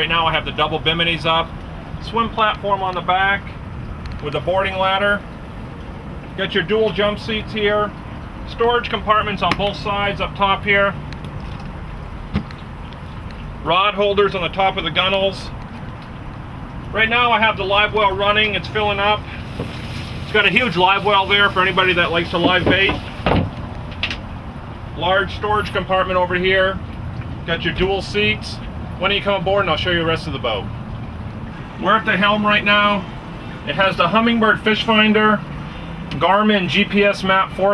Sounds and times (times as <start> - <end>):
Speech: 0.0 - 3.6, 4.2 - 5.2, 6.4 - 11.0, 13.6 - 15.6, 16.9 - 19.2, 20.3 - 23.0, 25.0 - 26.8, 27.5 - 30.7, 31.8 - 33.1, 33.7 - 35.4, 36.1 - 37.7.